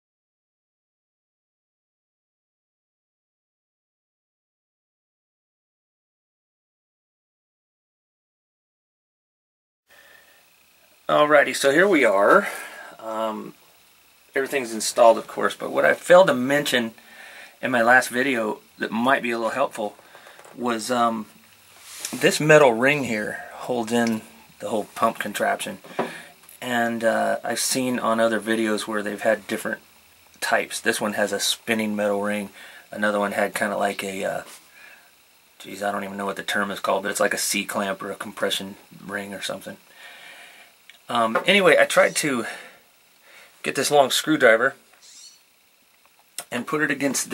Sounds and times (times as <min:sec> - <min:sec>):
Speech: 0:11.1 - 0:13.6, 0:14.3 - 0:17.0, 0:17.6 - 0:20.0, 0:20.6 - 0:21.3, 0:22.1 - 0:25.8, 0:26.6 - 0:29.8, 0:30.4 - 0:34.6, 0:35.6 - 0:39.8, 0:41.1 - 0:42.6, 0:43.6 - 0:44.8, 0:46.4 - 0:47.3.